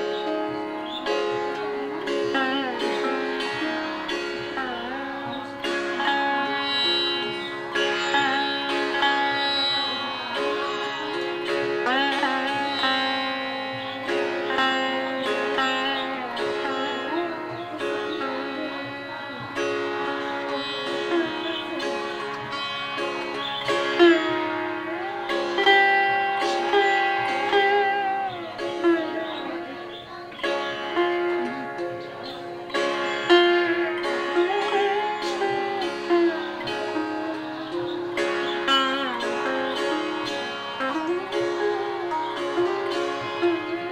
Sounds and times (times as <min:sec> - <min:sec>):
Sitar: 0:00.0 - 0:43.9.